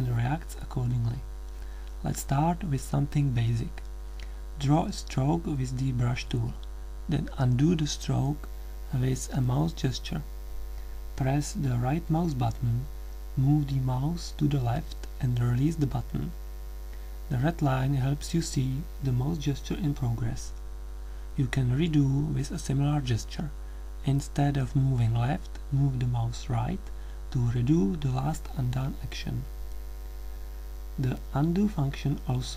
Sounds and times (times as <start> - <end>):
Speech: 0.0 - 1.3, 2.0 - 3.9, 4.6 - 10.3, 11.2 - 16.4, 17.3 - 20.6, 21.4 - 29.5, 31.0 - 32.5.